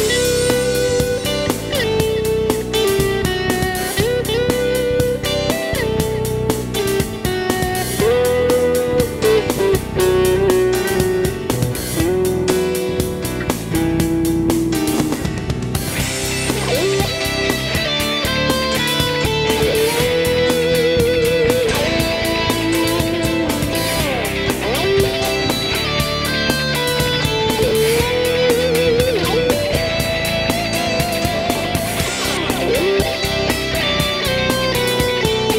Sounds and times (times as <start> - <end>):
Electric guitar: 0.0 - 35.5
Strum: 0.0 - 35.5.